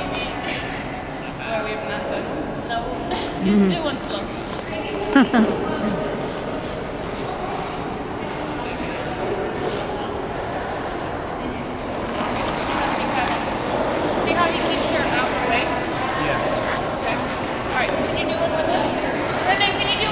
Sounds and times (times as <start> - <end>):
Inside, large room or hall: 0.0 - 20.1.